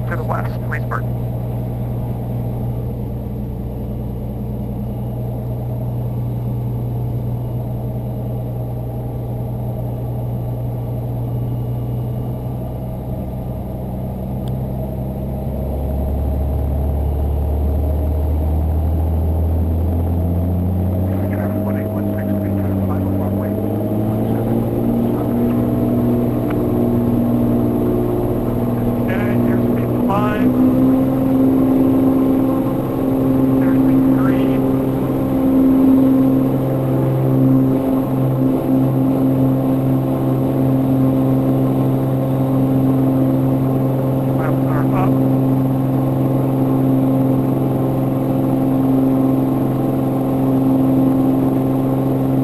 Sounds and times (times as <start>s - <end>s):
Speech: 0.0s - 1.1s, 21.1s - 23.6s, 28.8s - 30.6s, 33.6s - 34.6s, 44.4s - 45.2s.